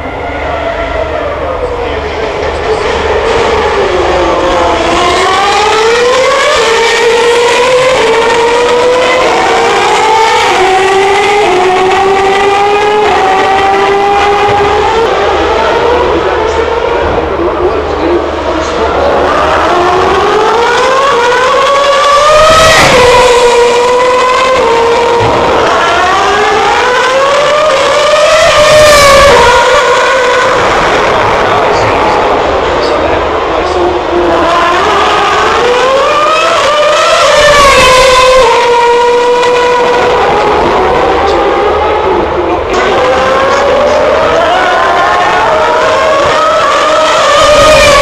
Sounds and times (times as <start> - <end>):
Outside, urban or manmade: 0.0 - 48.0
Vehicle: 0.0 - 48.0
Speech: 1.4 - 3.2, 15.1 - 19.7, 31.1 - 34.6.